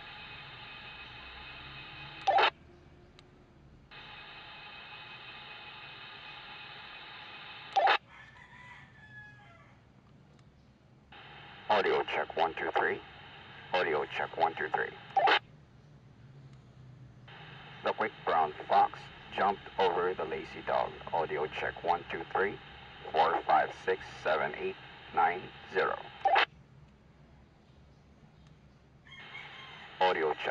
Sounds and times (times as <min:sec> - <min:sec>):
Radio: 0:00.0 - 0:02.6, 0:04.0 - 0:08.0, 0:11.2 - 0:15.4, 0:17.3 - 0:26.5, 0:29.2 - 0:30.5
Speech: 0:11.7 - 0:13.1, 0:13.7 - 0:15.1, 0:17.8 - 0:26.1, 0:30.0 - 0:30.5.